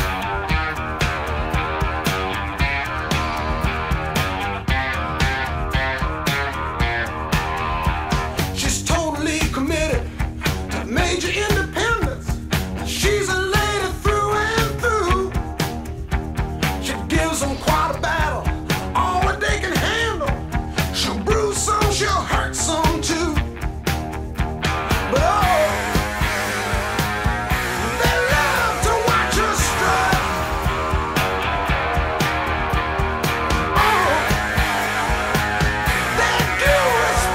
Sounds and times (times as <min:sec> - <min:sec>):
Electric guitar: 0:00.0 - 0:37.3.